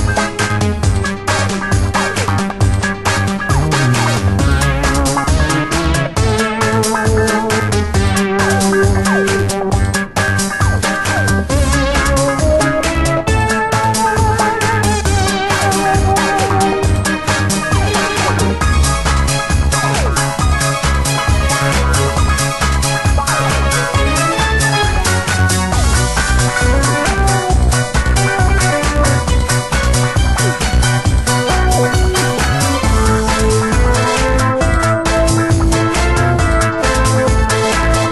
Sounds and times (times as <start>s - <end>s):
Music: 0.0s - 38.1s.